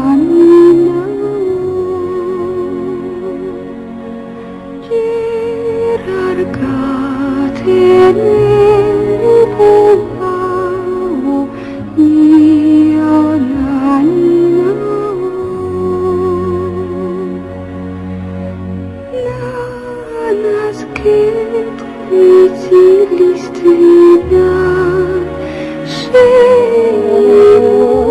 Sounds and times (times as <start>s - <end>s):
Lullaby: 0.0s - 28.1s.